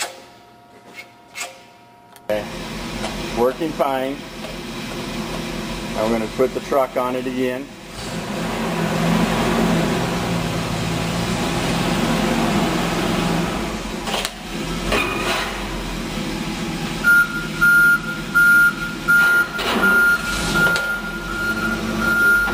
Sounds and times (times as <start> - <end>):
Truck: 2.4 - 22.5.